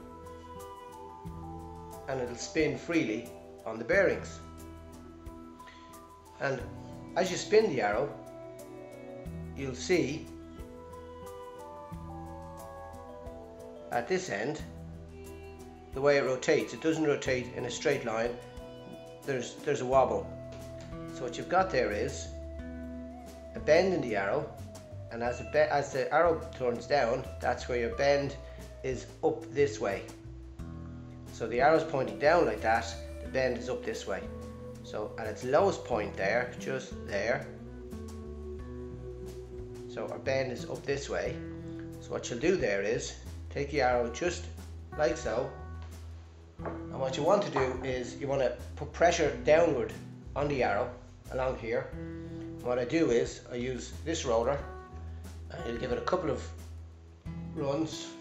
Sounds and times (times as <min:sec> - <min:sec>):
Music: 0:00.0 - 0:58.2
Speech: 0:02.1 - 0:04.4, 0:06.4 - 0:08.2, 0:09.6 - 0:10.2, 0:14.0 - 0:14.7, 0:16.0 - 0:18.4, 0:19.3 - 0:20.3, 0:21.2 - 0:22.3, 0:23.6 - 0:24.5, 0:25.1 - 0:30.1, 0:31.4 - 0:34.3, 0:34.9 - 0:37.5, 0:39.9 - 0:41.4, 0:42.0 - 0:45.5, 0:46.9 - 0:51.9, 0:52.6 - 0:54.7, 0:55.5 - 0:56.6, 0:57.6 - 0:58.2.